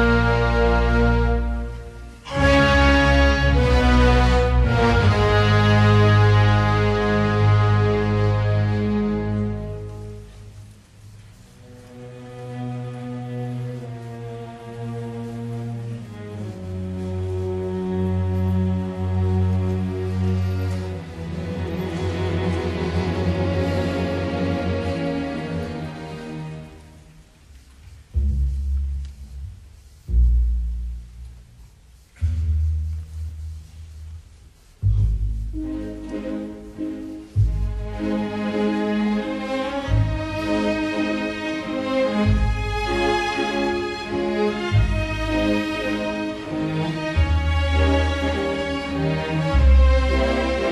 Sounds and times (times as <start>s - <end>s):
Music: 0.0s - 50.7s.